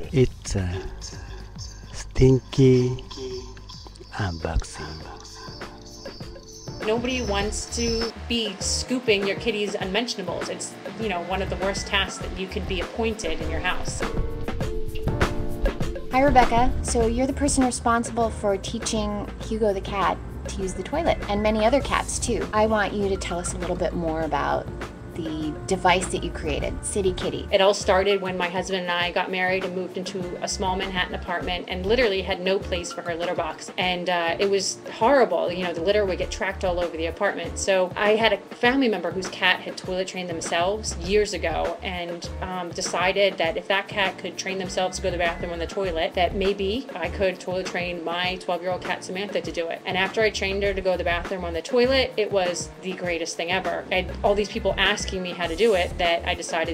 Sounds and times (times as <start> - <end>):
Speech: 0.0 - 1.3, 2.0 - 5.4, 6.9 - 14.1, 16.2 - 24.6, 25.2 - 56.7
Music: 0.0 - 56.7.